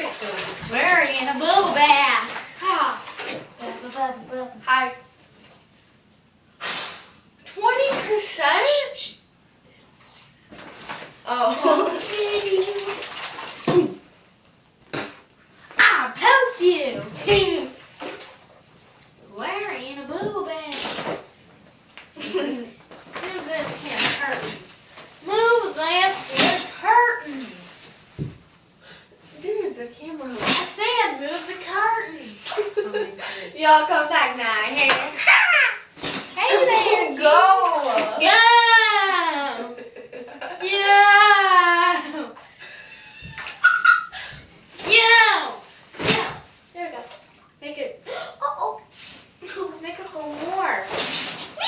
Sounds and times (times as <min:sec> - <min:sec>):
Water: 0:00.0 - 0:05.1, 0:09.9 - 0:14.2, 0:16.2 - 0:19.2
Bathtub (filling or washing): 0:00.0 - 0:51.6.